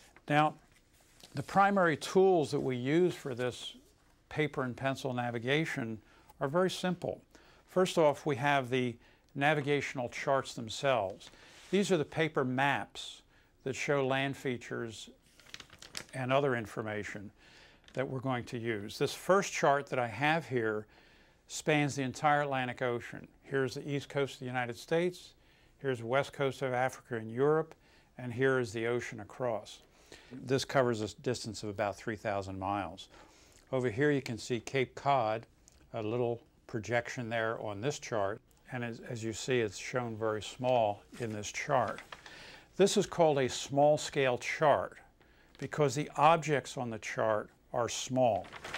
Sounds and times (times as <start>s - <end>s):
Speech: 0.2s - 0.7s, 1.3s - 15.2s, 16.1s - 20.9s, 21.5s - 29.8s, 30.4s - 33.1s, 33.7s - 42.1s, 42.8s - 48.6s.